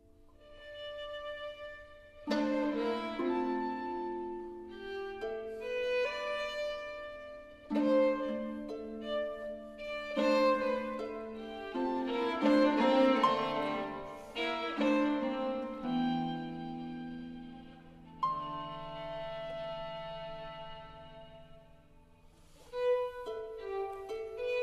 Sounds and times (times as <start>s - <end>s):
Violin, fiddle: 0.0s - 24.6s.